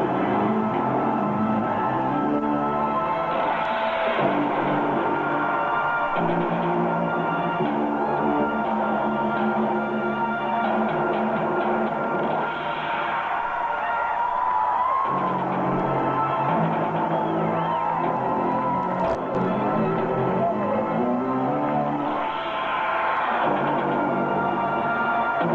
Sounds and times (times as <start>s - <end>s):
Music: 0.0s - 25.5s.